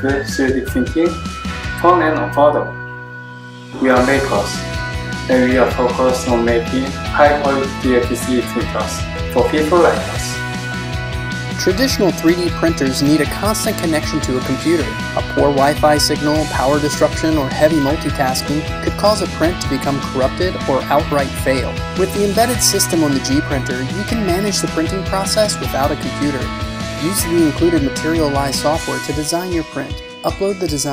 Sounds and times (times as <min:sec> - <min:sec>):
Speech: 0:00.0 - 0:01.2, 0:01.8 - 0:02.7, 0:03.8 - 0:04.6, 0:05.3 - 0:10.4, 0:11.6 - 0:30.9
Music: 0:00.0 - 0:30.9.